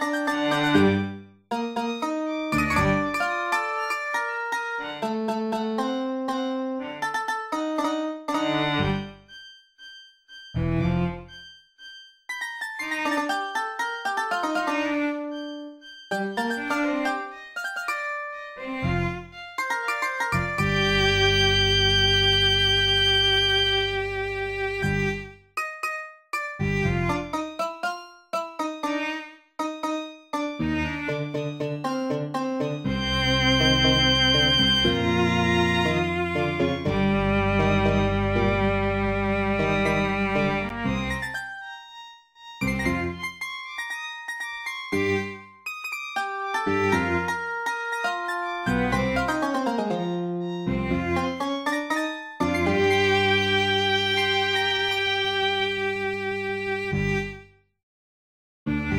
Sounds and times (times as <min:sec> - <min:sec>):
Violin, fiddle: 0:00.0 - 0:01.2, 0:02.3 - 0:04.0, 0:08.3 - 0:09.2, 0:14.3 - 0:25.4, 0:26.6 - 0:27.5, 0:28.7 - 0:29.4, 0:30.4 - 0:41.5, 0:46.6 - 0:57.5, 0:58.7 - 0:58.9
Cello: 0:08.4 - 0:09.2, 0:18.6 - 0:19.3, 0:20.4 - 0:25.4, 0:30.4 - 0:41.3, 0:48.7 - 0:57.5, 0:58.7 - 0:58.9.